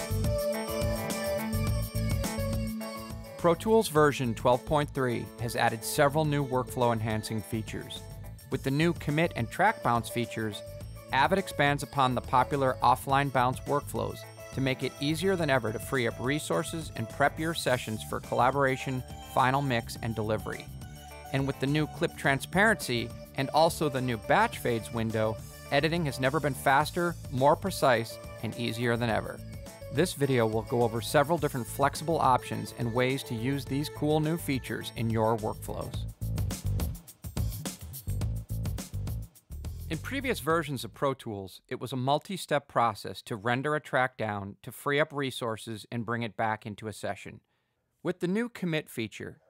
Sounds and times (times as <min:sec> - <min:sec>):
Music: 0:00.0 - 0:40.9
Speech: 0:03.4 - 0:10.6, 0:11.2 - 0:20.7, 0:21.3 - 0:29.4, 0:30.0 - 0:36.1, 0:39.9 - 0:47.4, 0:48.0 - 0:49.4.